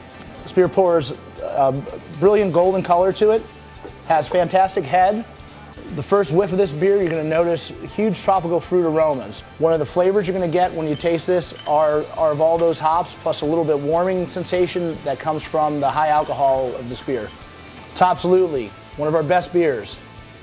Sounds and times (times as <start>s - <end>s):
Music: 0.0s - 20.4s
Speech: 0.5s - 3.5s, 4.1s - 5.3s, 5.9s - 17.4s, 18.0s - 20.0s.